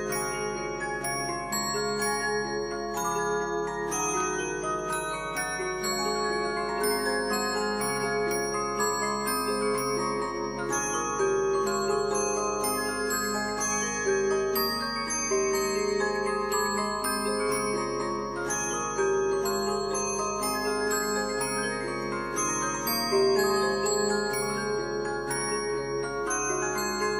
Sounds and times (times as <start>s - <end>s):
Glockenspiel: 0.0s - 27.1s
Marimba, xylophone: 0.0s - 27.1s.